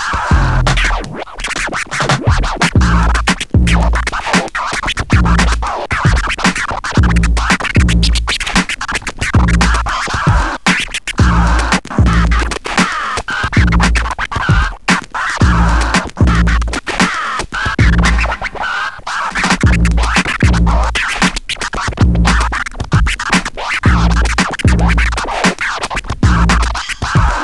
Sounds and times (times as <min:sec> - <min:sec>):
Scratching (performance technique): 0:00.0 - 0:27.4.